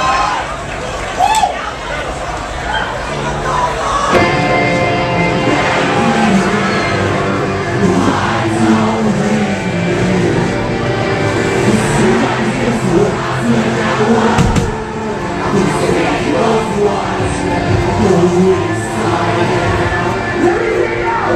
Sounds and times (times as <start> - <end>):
Music: 3.2 - 21.3.